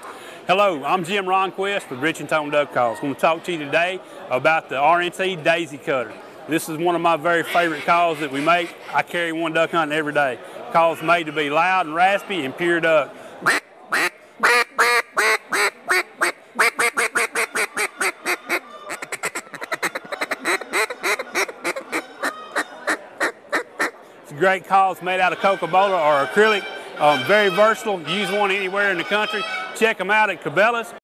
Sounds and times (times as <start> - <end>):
Speech: 0.5 - 13.2, 24.2 - 31.0
Quack: 13.4 - 24.0.